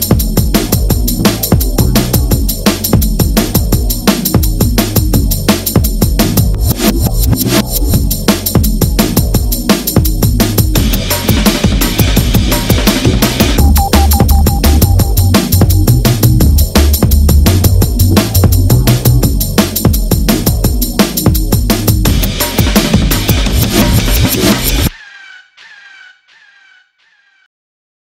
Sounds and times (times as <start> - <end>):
Drum and bass: 0.0 - 24.9.